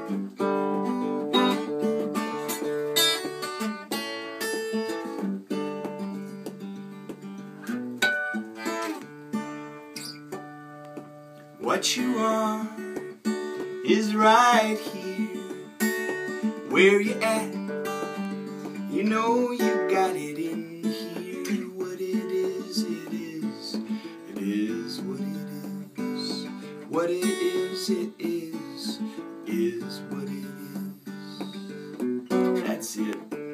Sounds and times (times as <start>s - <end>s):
Guitar: 0.0s - 33.5s.